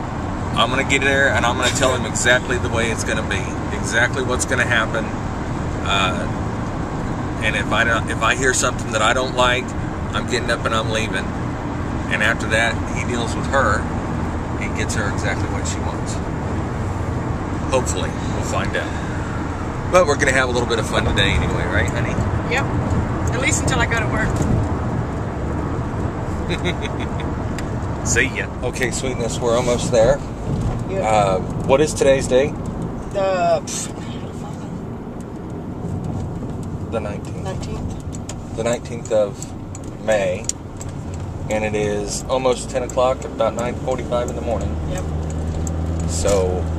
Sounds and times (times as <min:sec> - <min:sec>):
Car: 0:00.0 - 0:46.7
Speech: 0:00.6 - 0:05.1, 0:05.9 - 0:06.3, 0:07.4 - 0:11.3, 0:14.6 - 0:16.2, 0:17.7 - 0:18.9, 0:20.0 - 0:22.6, 0:23.3 - 0:24.3, 0:28.1 - 0:30.2, 0:33.2 - 0:34.7, 0:37.0 - 0:37.8, 0:38.6 - 0:39.4, 0:40.0 - 0:40.5, 0:41.5 - 0:45.0, 0:46.1 - 0:46.7.